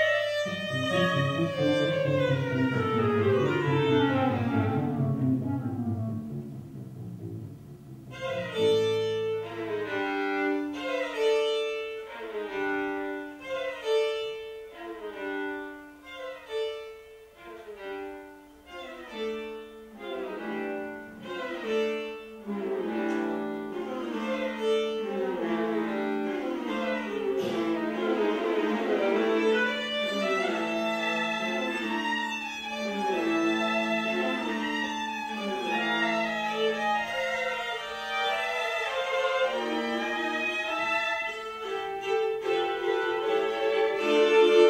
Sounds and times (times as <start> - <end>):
Violin, fiddle: 0.0 - 6.4, 8.0 - 44.6
Cello: 0.0 - 44.6.